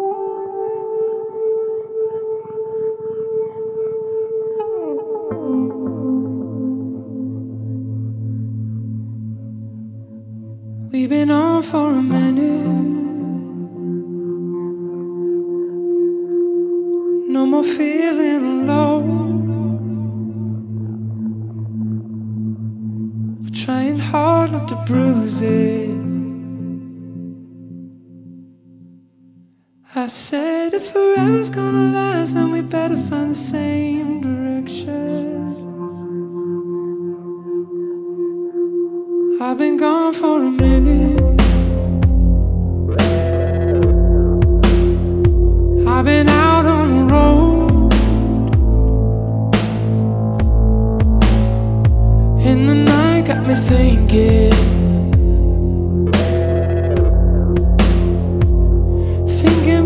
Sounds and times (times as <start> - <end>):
Music: 0.0 - 59.8.